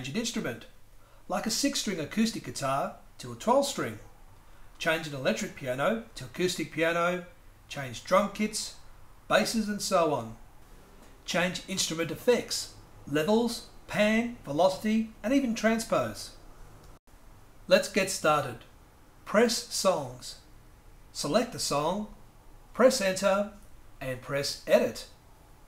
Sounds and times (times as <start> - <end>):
Speech: 0.0 - 4.1, 4.8 - 10.4, 11.3 - 16.4, 17.7 - 20.5, 21.2 - 22.2, 22.8 - 25.2.